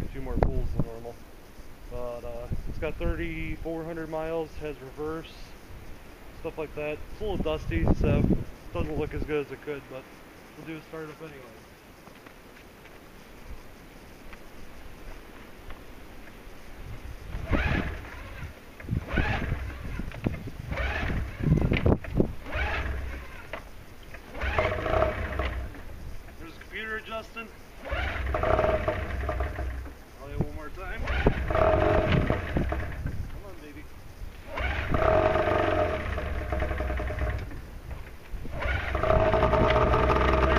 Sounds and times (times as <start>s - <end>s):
Outside, rural or natural: 0.0s - 40.5s
Vehicle: 17.0s - 40.5s.